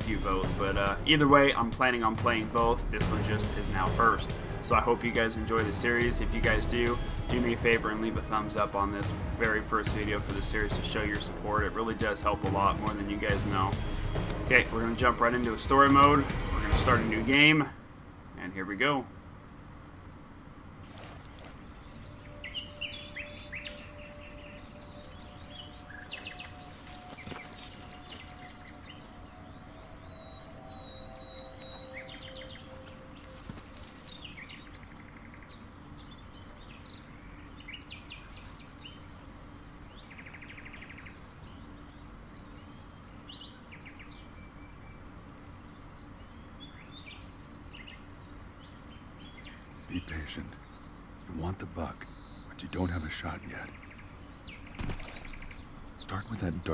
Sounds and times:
Chirp, tweet: 20.9 - 56.7.

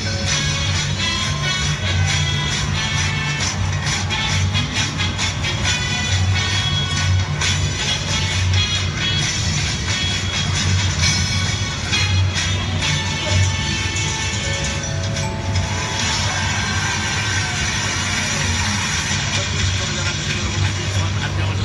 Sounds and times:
Music: 0.0 - 21.6.

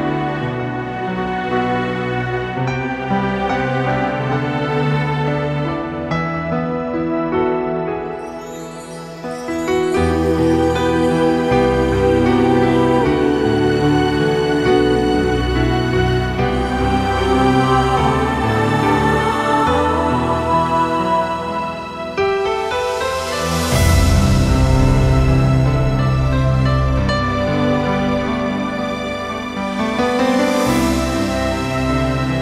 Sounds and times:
Music: 0.0 - 32.4.

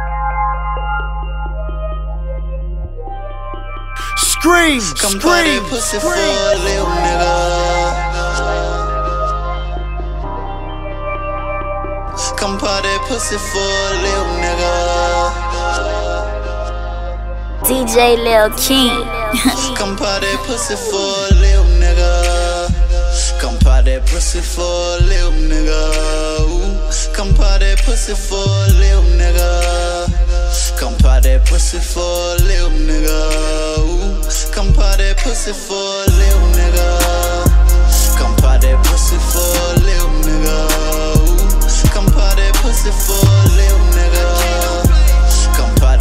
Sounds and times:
Music: 0.0 - 46.0.

